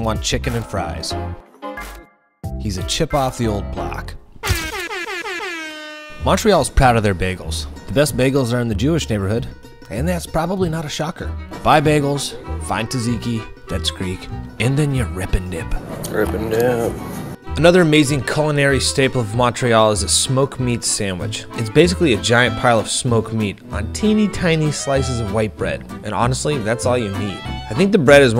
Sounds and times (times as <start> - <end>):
Speech: 0.0 - 1.2, 2.6 - 4.2, 6.2 - 17.0, 17.6 - 28.3
Music: 0.0 - 28.3.